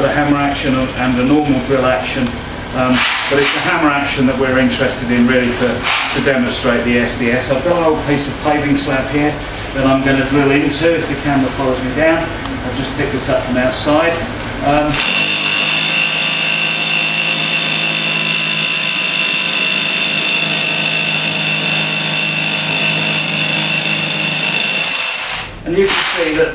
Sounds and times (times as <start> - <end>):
Speech: 0.0 - 15.0, 25.6 - 26.5
Drill: 15.0 - 26.3.